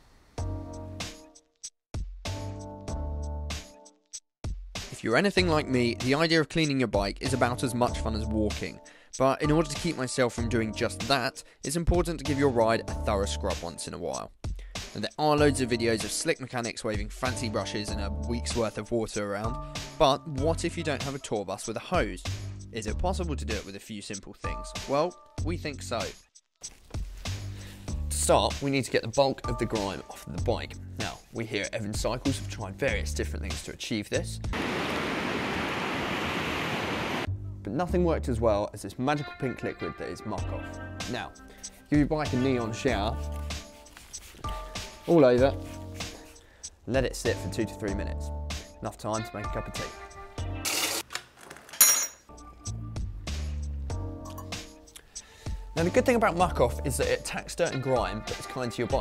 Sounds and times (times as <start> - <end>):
Music: 0.4 - 34.6, 37.3 - 51.0, 52.3 - 59.0
Speech: 4.9 - 14.3, 14.9 - 26.2, 28.1 - 34.5, 37.6 - 43.2, 45.1 - 45.6, 46.9 - 50.0, 55.8 - 59.0.